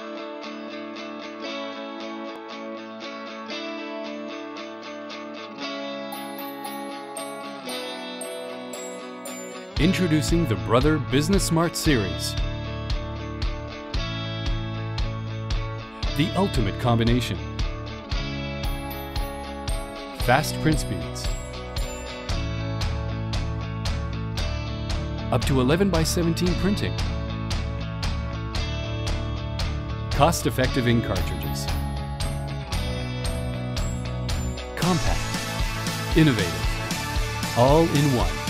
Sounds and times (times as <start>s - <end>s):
Music: 0.0s - 38.4s
Speech: 9.8s - 12.4s, 16.2s - 17.4s, 20.2s - 21.3s, 25.3s - 27.0s, 30.2s - 31.7s, 34.8s - 35.3s, 36.1s - 36.7s, 37.6s - 38.4s.